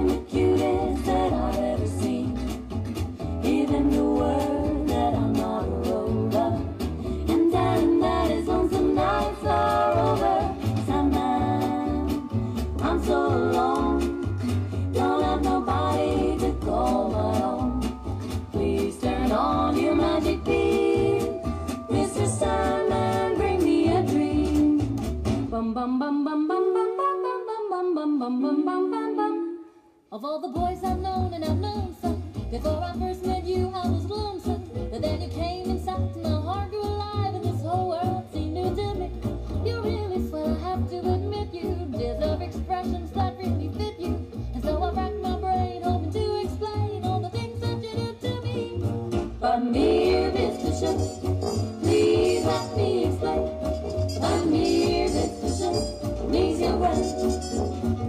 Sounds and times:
Music: 0:00.0 - 0:58.0.

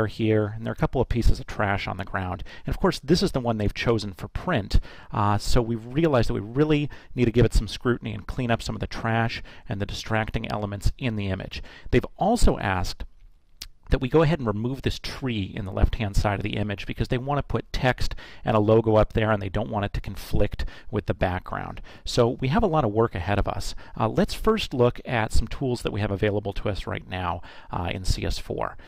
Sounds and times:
Speech: 0:00.0 - 0:13.1, 0:13.9 - 0:28.8.

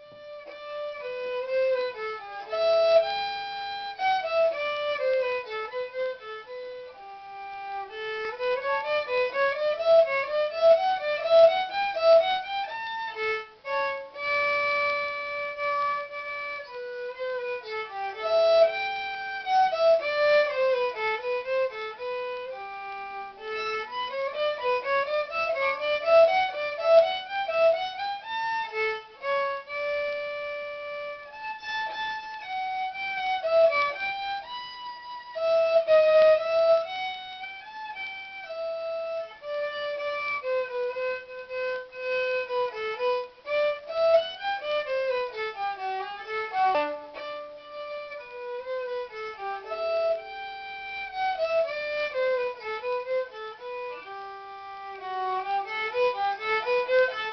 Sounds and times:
Violin, fiddle: 0:00.0 - 0:57.3.

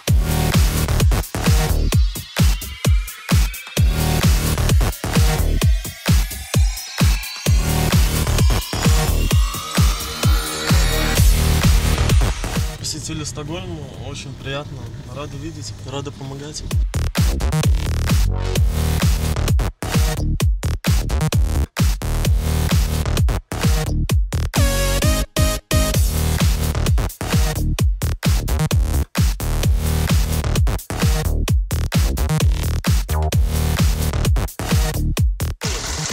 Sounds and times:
Music: 0:00.0 - 0:13.2, 0:16.6 - 0:36.1
Speech: 0:12.8 - 0:16.8.

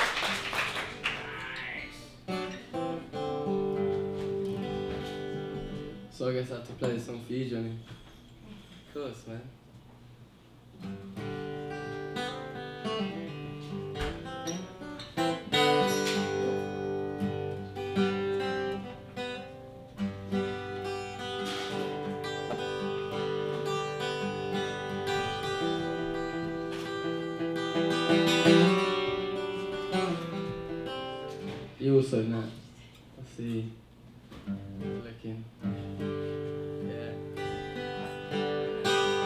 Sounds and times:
Music: 0:00.0 - 0:06.1, 0:10.8 - 0:31.8, 0:34.3 - 0:39.2
Speech: 0:06.2 - 0:07.8, 0:08.9 - 0:09.6, 0:31.8 - 0:33.8, 0:34.9 - 0:35.5.

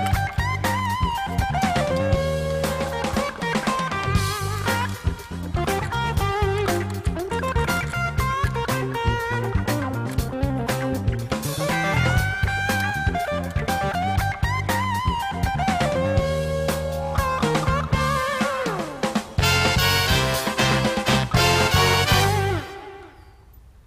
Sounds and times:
Music: 0:00.0 - 0:23.7.

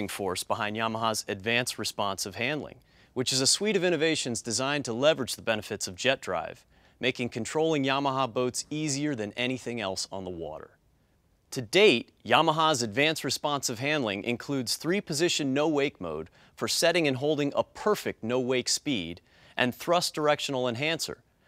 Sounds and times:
Speech: 0:00.0 - 0:10.8, 0:11.5 - 0:21.2.

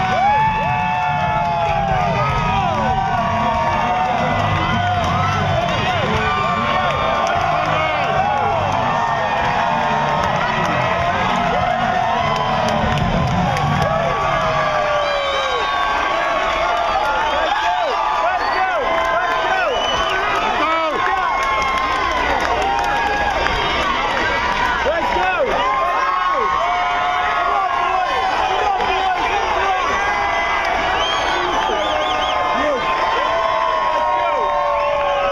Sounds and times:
Music: 0:00.0 - 0:14.8.

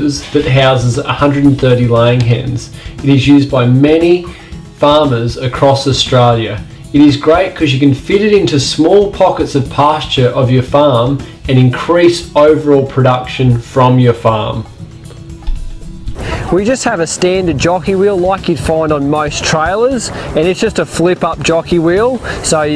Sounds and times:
Speech: 0:00.0 - 0:14.7, 0:16.5 - 0:22.7
Music: 0:00.0 - 0:22.7.

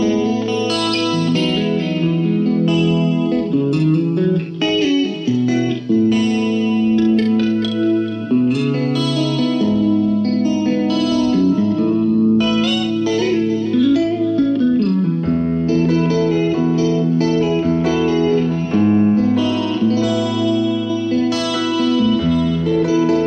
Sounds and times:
Effects unit: 0:00.0 - 0:23.2
Music: 0:00.0 - 0:23.2.

